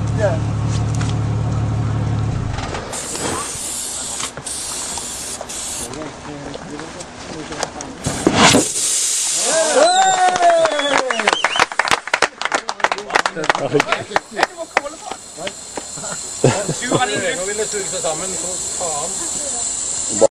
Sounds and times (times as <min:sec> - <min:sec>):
Speech: 0:00.1 - 0:00.5, 0:05.9 - 0:08.1, 0:16.5 - 0:20.3.